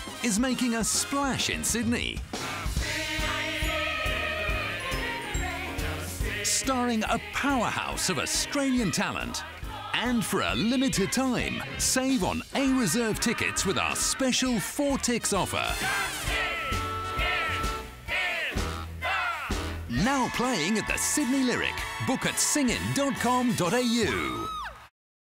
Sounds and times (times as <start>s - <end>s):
Music: 0.0s - 24.9s
Speech: 0.2s - 2.2s, 6.5s - 9.4s, 10.0s - 15.8s, 19.9s - 24.6s.